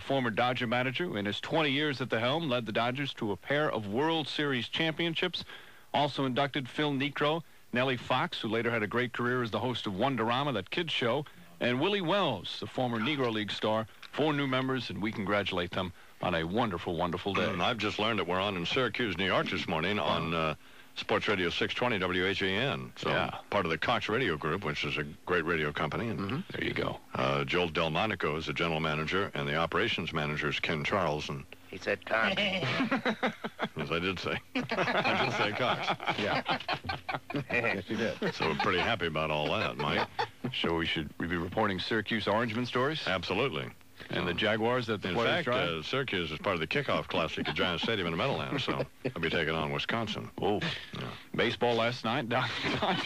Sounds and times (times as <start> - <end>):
Male speech, man speaking: 0.0 - 32.6, 33.8 - 36.5, 37.4 - 53.0
Narration, monologue: 0.0 - 53.0.